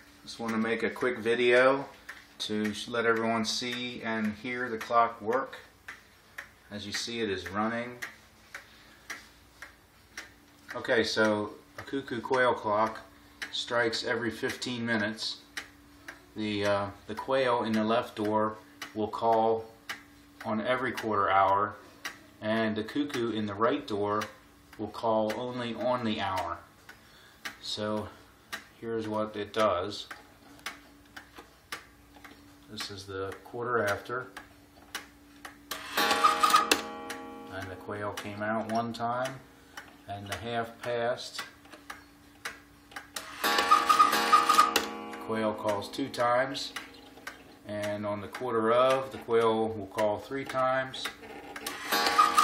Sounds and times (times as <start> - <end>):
Tick-tock: 0.0 - 13.6, 14.4 - 52.4
Speech: 0.3 - 5.7, 6.7 - 8.1, 10.7 - 15.4, 16.3 - 19.8, 20.4 - 21.8, 22.4 - 26.7, 27.6 - 28.2, 28.8 - 30.1, 32.7 - 34.4, 37.5 - 39.5, 40.1 - 41.5, 45.3 - 46.8, 47.7 - 51.2.